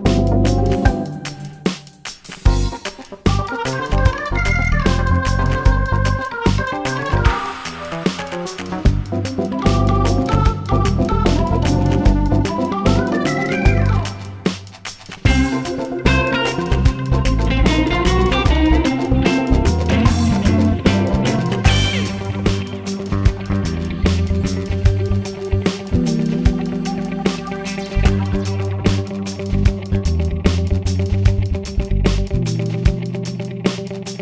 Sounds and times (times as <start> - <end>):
Music: 0.0 - 34.2.